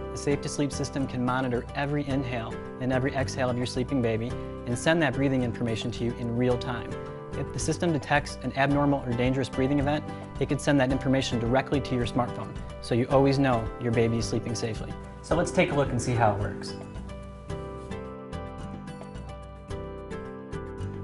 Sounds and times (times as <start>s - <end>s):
Music: 0.0s - 21.0s
Speech: 0.2s - 16.8s.